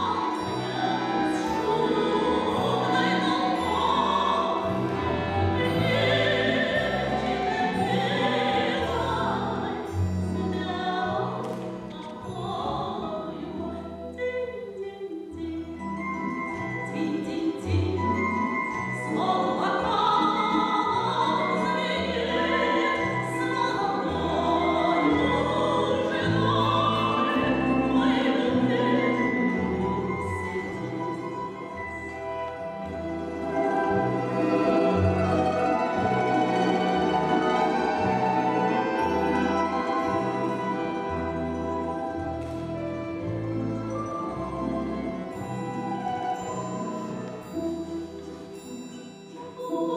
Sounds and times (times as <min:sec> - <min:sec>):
Opera: 0:00.0 - 0:49.9
Orchestra: 0:00.0 - 0:49.9.